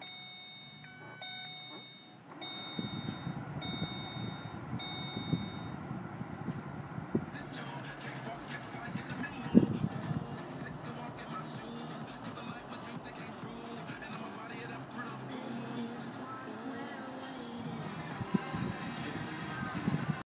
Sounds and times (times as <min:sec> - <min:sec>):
Music: 0:07.3 - 0:20.2.